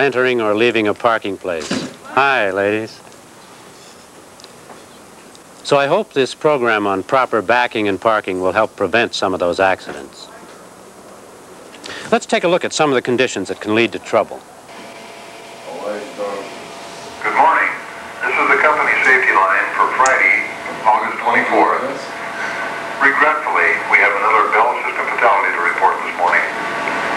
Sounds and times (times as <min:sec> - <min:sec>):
Speech: 0:00.0 - 0:03.0, 0:05.6 - 0:10.6, 0:12.1 - 0:14.4, 0:15.7 - 0:16.5, 0:17.2 - 0:22.2, 0:23.0 - 0:26.6.